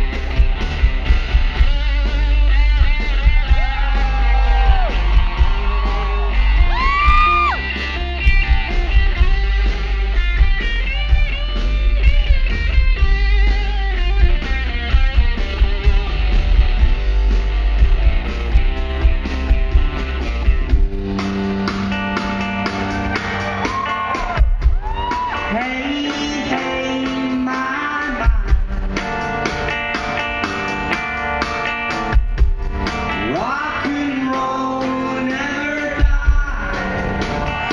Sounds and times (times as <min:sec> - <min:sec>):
Guitar: 0:00.0 - 0:37.7
Singing: 0:25.4 - 0:28.5, 0:33.2 - 0:37.7.